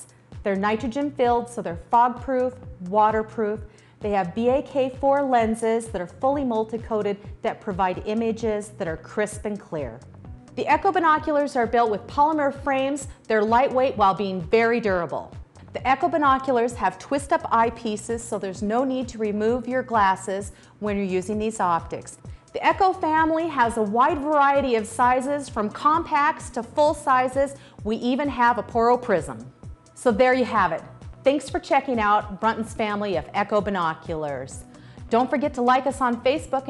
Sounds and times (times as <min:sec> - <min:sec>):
Speech: 0:00.0 - 0:10.0, 0:10.6 - 0:36.6
Music: 0:00.0 - 0:36.6.